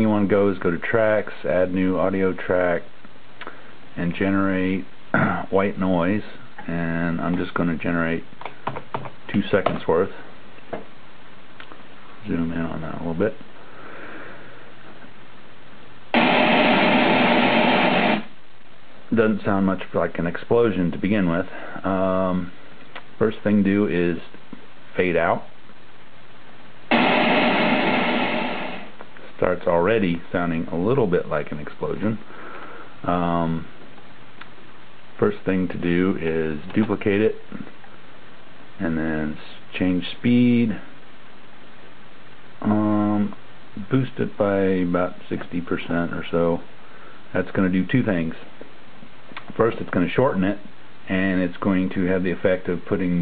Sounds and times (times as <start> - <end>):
Speech: 0.0 - 3.0, 4.0 - 8.3, 9.3 - 10.3, 12.2 - 13.4, 19.1 - 22.6, 23.2 - 25.6, 29.2 - 32.3, 33.0 - 33.8, 35.2 - 37.8, 38.8 - 41.0, 42.6 - 46.7, 47.3 - 48.6, 49.4 - 53.2.